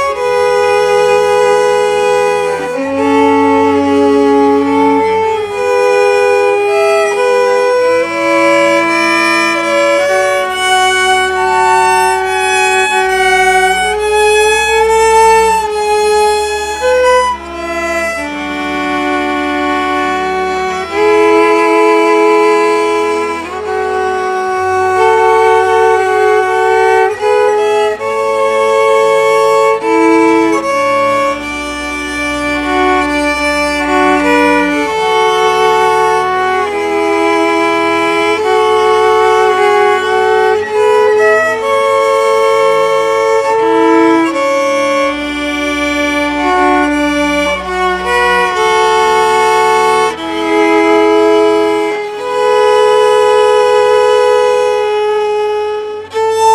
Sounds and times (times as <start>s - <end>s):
Violin, fiddle: 0.0s - 56.5s.